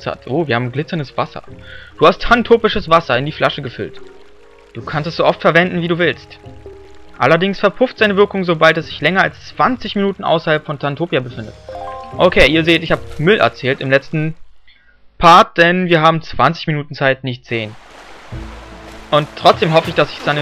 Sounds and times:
Speech: 0:00.0 - 0:04.0, 0:04.8 - 0:06.4, 0:07.2 - 0:14.4, 0:15.2 - 0:17.8, 0:19.2 - 0:20.4
Music: 0:00.0 - 0:15.1, 0:17.7 - 0:20.4
Rustling leaves: 0:12.2 - 0:14.5, 0:17.7 - 0:20.4.

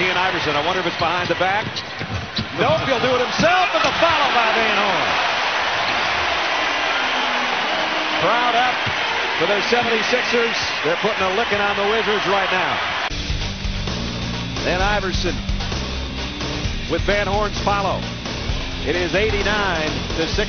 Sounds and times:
Speech: 0:00.0 - 0:01.8, 0:02.6 - 0:05.1, 0:08.2 - 0:08.8, 0:09.4 - 0:12.8, 0:14.6 - 0:15.4, 0:16.9 - 0:18.0, 0:18.9 - 0:20.4
Music: 0:13.1 - 0:20.4.

